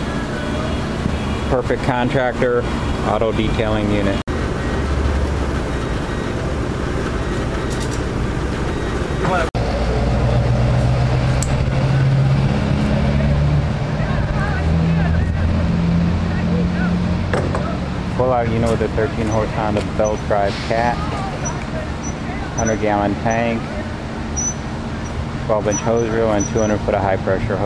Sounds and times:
Vehicle: 0:00.0 - 0:27.6
Speech: 0:01.5 - 0:04.2, 0:13.1 - 0:23.9, 0:25.5 - 0:27.6.

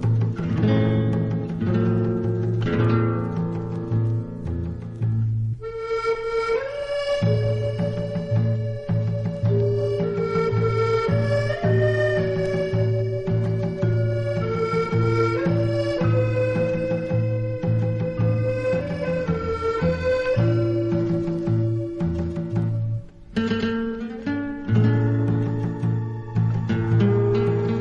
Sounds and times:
Guitar: 0:00.0 - 0:27.8.

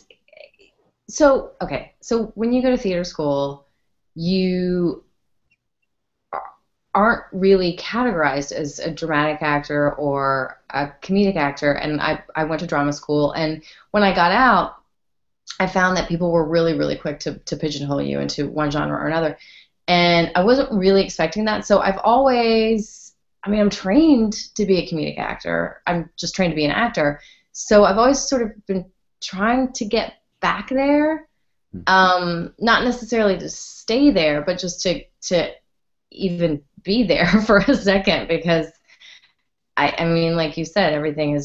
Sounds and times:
Speech: 0:01.1 - 0:03.6, 0:04.2 - 0:05.0, 0:06.4 - 0:14.8, 0:15.5 - 0:31.2, 0:31.8 - 0:35.6, 0:36.2 - 0:38.7, 0:39.8 - 0:41.4.

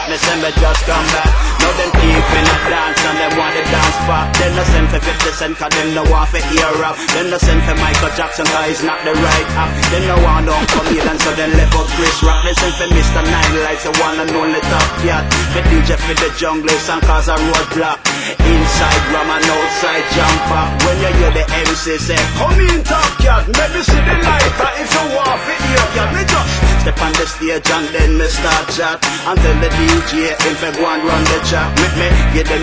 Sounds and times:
Music: 0:00.0 - 0:32.6.

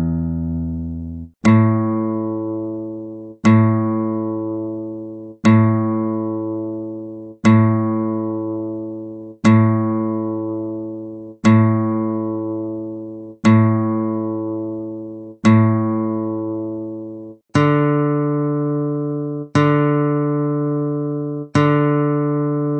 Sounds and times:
Guitar: 0:00.0 - 0:22.7.

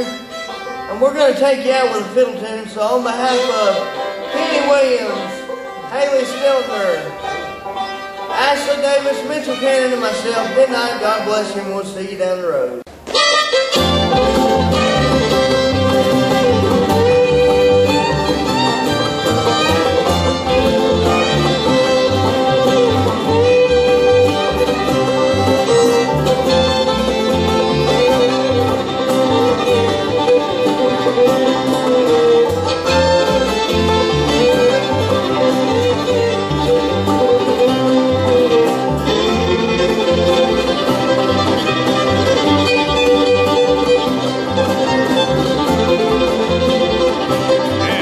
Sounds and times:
Banjo: 0:00.0 - 0:11.5, 0:13.1 - 0:48.0
Guitar: 0:00.0 - 0:48.0
Speech: 0:00.9 - 0:07.2, 0:08.3 - 0:12.9, 0:47.8 - 0:48.0.

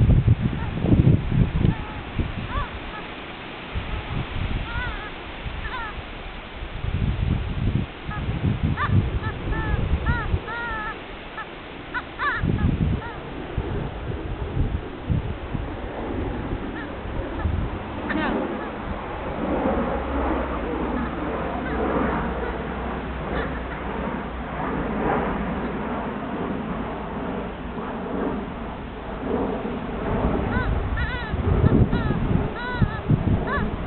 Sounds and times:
Chicken, rooster: 0:01.7 - 0:03.1, 0:04.7 - 0:06.0, 0:08.8 - 0:12.4, 0:16.8 - 0:17.5, 0:21.0 - 0:22.6, 0:23.3 - 0:23.8, 0:30.5 - 0:33.8
Domestic animals, pets: 0:01.7 - 0:03.2, 0:04.7 - 0:06.0, 0:08.8 - 0:13.2, 0:16.7 - 0:17.5, 0:20.9 - 0:24.0, 0:30.5 - 0:33.8.

